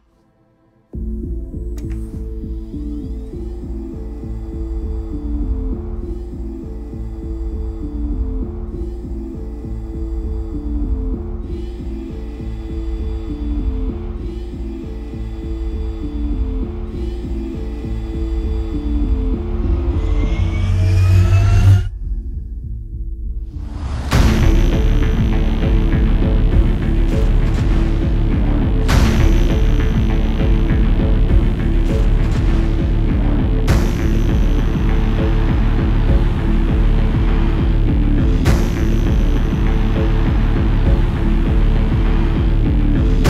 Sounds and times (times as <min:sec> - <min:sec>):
Soundtrack music: 0:00.0 - 0:43.2
Exciting music: 0:00.9 - 0:43.2.